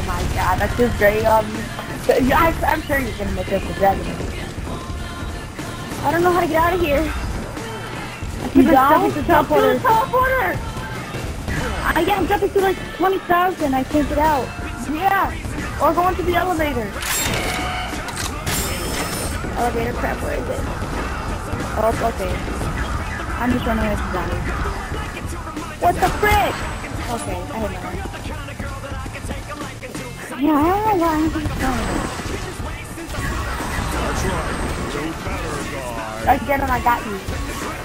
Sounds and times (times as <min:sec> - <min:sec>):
Speech: 0:00.0 - 0:04.3, 0:06.0 - 0:07.2, 0:08.4 - 0:10.6, 0:11.6 - 0:17.0, 0:18.7 - 0:20.7, 0:21.7 - 0:22.6, 0:23.4 - 0:25.0, 0:25.6 - 0:28.2, 0:30.2 - 0:32.1, 0:33.9 - 0:37.5
Music: 0:00.0 - 0:37.8.